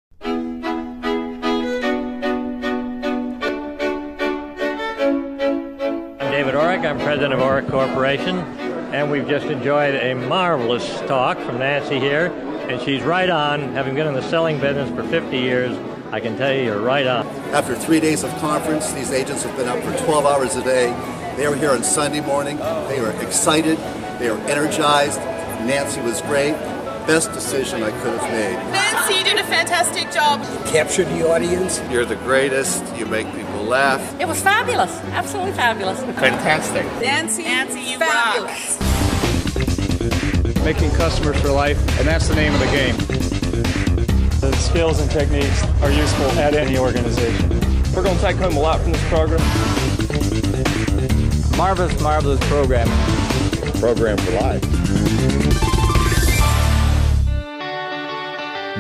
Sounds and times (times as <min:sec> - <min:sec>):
Music: 0:00.1 - 0:58.8.